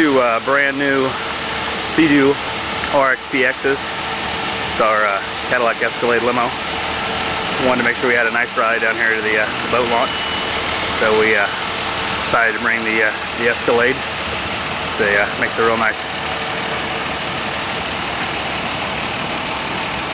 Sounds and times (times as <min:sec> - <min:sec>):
Speech: 0:00.0 - 0:01.2, 0:01.9 - 0:03.9, 0:04.8 - 0:06.6, 0:07.6 - 0:10.2, 0:11.0 - 0:11.6, 0:12.2 - 0:14.0, 0:14.9 - 0:16.1.